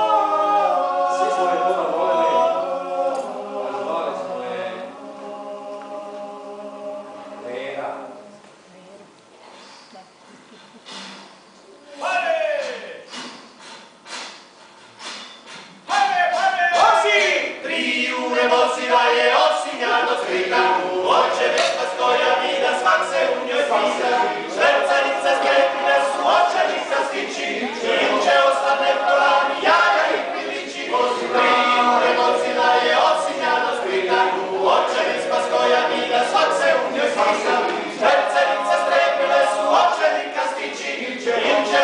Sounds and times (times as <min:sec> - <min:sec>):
Singing: 0:00.0 - 0:07.6, 0:15.9 - 0:41.8
Speech: 0:11.8 - 0:13.1.